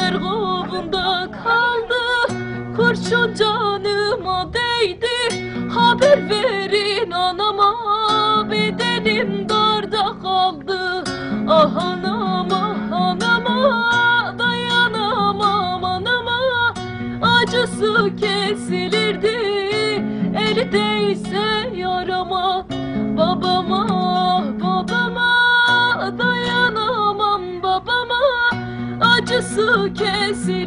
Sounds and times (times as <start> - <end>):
Acoustic guitar: 0.0 - 30.6.